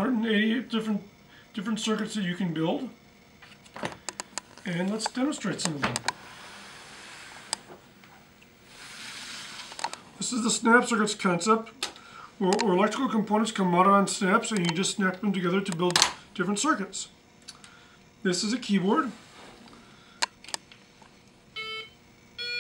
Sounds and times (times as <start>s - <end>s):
Speech: 0.0s - 3.0s, 4.6s - 6.0s, 10.2s - 11.8s, 12.4s - 17.2s, 18.2s - 19.2s.